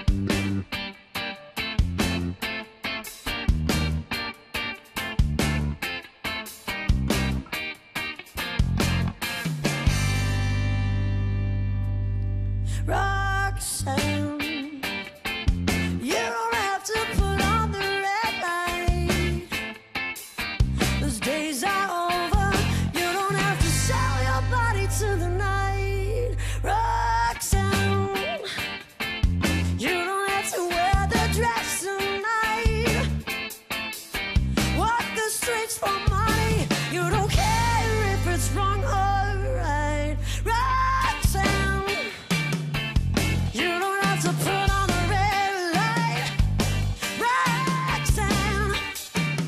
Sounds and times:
Music: 0:00.0 - 0:49.4.

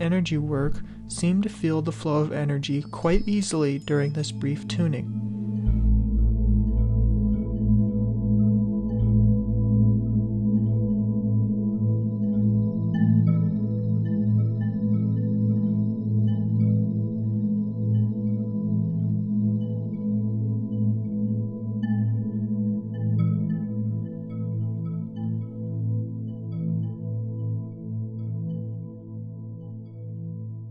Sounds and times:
Singing bowl: 0:00.7 - 0:27.1.

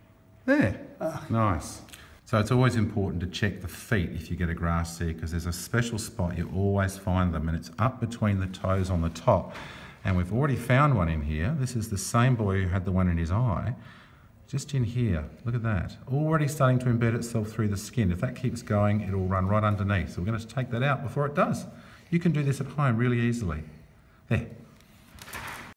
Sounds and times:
Speech: 0:00.4 - 0:13.8, 0:14.5 - 0:24.7.

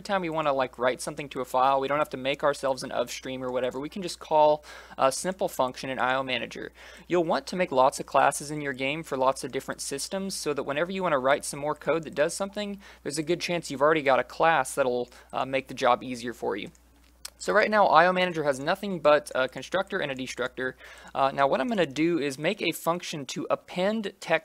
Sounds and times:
Speech: 0:00.0 - 0:24.4.

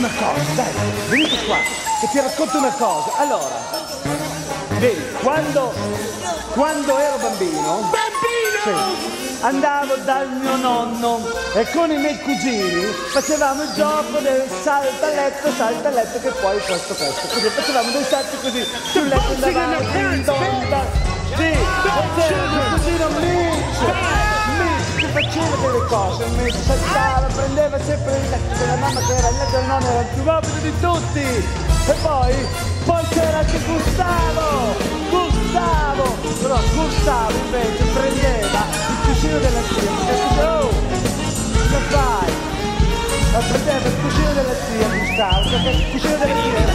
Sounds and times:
Rock music: 0:00.0 - 0:02.4, 0:18.6 - 0:46.7.

